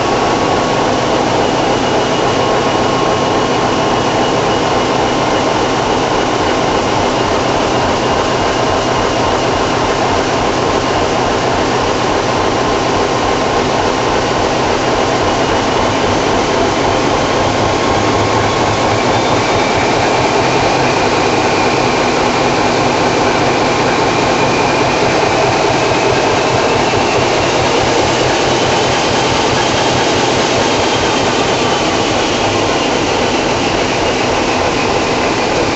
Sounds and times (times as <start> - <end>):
Heavy engine (low frequency): 0.0 - 35.7.